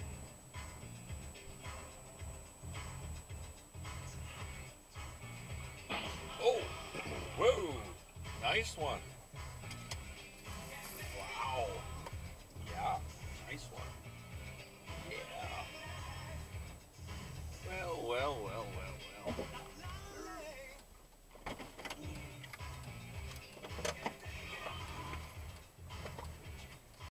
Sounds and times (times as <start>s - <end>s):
Music: 0.0s - 27.1s
Speech: 6.4s - 6.7s, 7.3s - 9.0s, 11.0s - 11.9s, 12.6s - 14.0s, 15.0s - 16.1s, 17.6s - 20.7s.